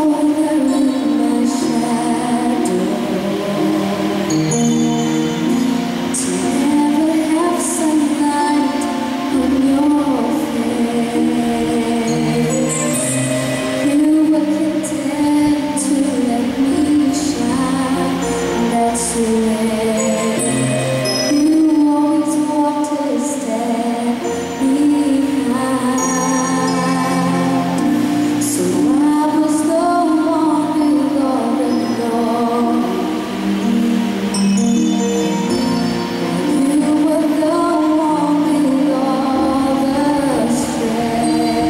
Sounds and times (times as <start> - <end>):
Female singing: 0.0 - 4.4, 6.2 - 13.0, 13.8 - 20.5, 21.3 - 33.3, 36.2 - 41.7
Music: 0.0 - 41.7.